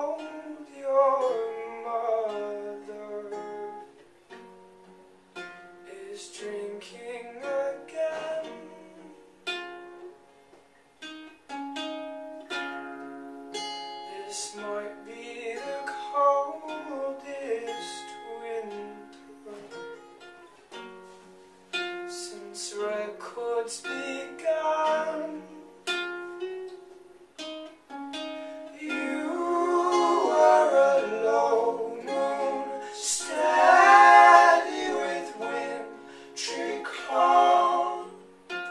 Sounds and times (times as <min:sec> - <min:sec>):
Pizzicato: 0:24.8 - 0:38.7.